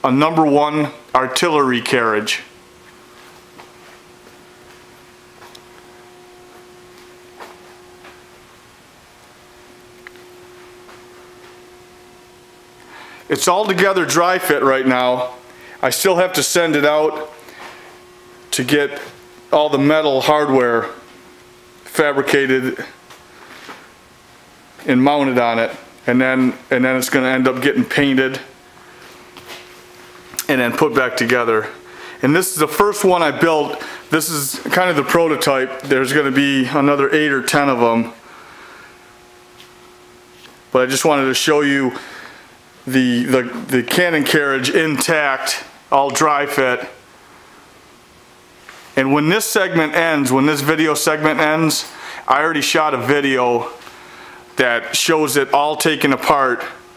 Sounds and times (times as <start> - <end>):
Speech: 0.0 - 2.5, 13.3 - 17.4, 18.5 - 21.0, 21.9 - 23.0, 24.8 - 28.5, 30.4 - 38.2, 40.7 - 42.0, 42.9 - 47.0, 49.0 - 53.8, 54.6 - 56.8.